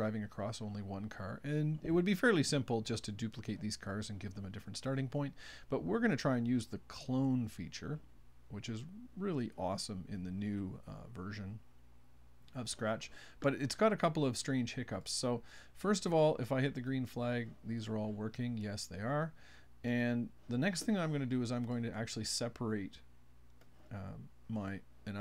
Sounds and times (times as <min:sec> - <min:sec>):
Speech: 0:00.0 - 0:11.6, 0:12.5 - 0:23.1, 0:23.9 - 0:25.2.